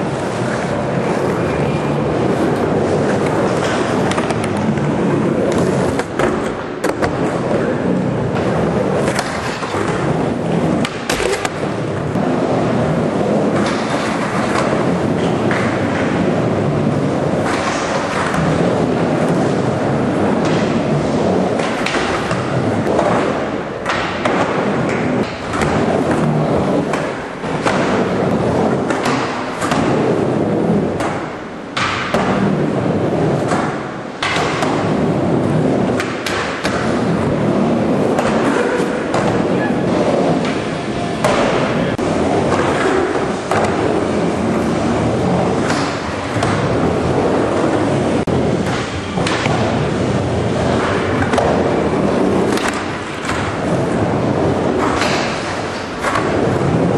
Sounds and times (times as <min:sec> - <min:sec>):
Inside, large room or hall: 0:00.0 - 0:56.9.